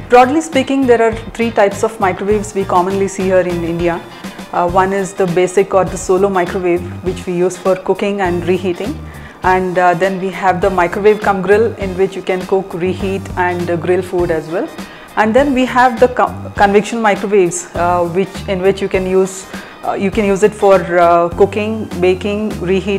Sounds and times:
Music: 0:00.0 - 0:22.9
Speech: 0:00.1 - 0:04.0, 0:04.6 - 0:22.9.

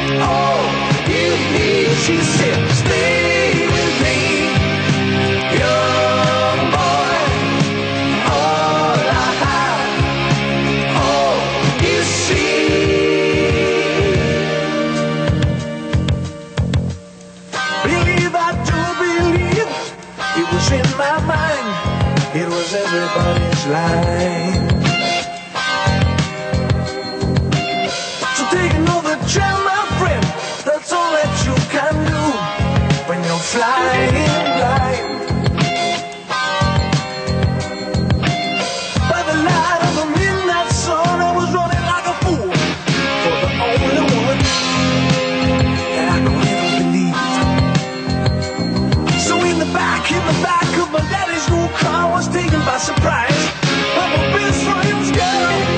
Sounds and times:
Singing: 0:00.0 - 0:04.7, 0:05.5 - 0:07.6, 0:08.2 - 0:10.1, 0:10.9 - 0:14.7, 0:33.1 - 0:35.2, 0:49.2 - 0:55.7
Independent music: 0:00.0 - 0:55.7.

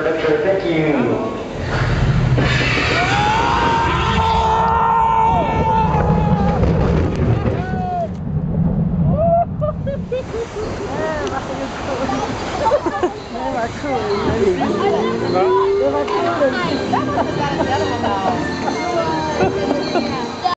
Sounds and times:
Music: 0:15.1 - 0:20.5.

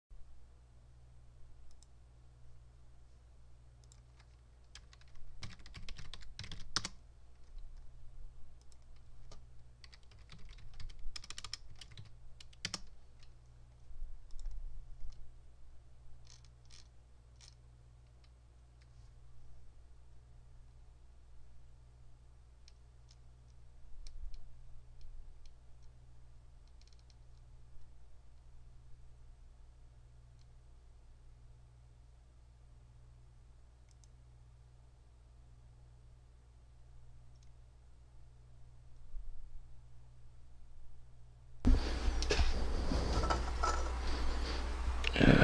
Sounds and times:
Computer keyboard: 0:03.8 - 0:07.6, 0:08.6 - 0:13.3, 0:16.2 - 0:17.6, 0:26.6 - 0:27.4.

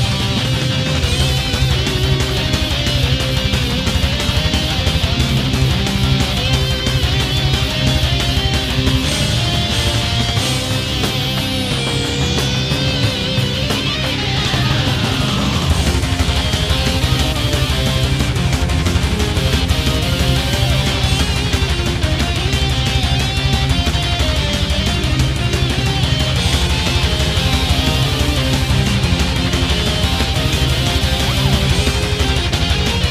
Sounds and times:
Music: 0:00.0 - 0:33.1.

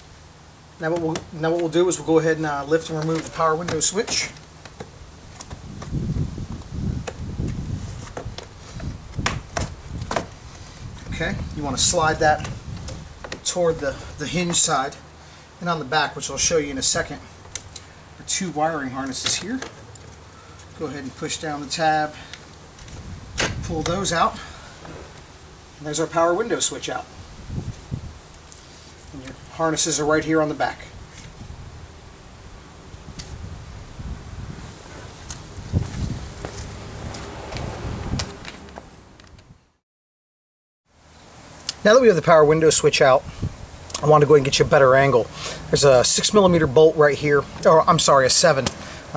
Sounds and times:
Speech: 0:00.8 - 0:04.4, 0:11.1 - 0:12.5, 0:13.4 - 0:15.0, 0:15.6 - 0:17.3, 0:18.2 - 0:19.7, 0:20.8 - 0:22.2, 0:23.6 - 0:24.5, 0:25.8 - 0:27.1, 0:29.1 - 0:30.9, 0:41.7 - 0:43.2, 0:44.0 - 0:48.7.

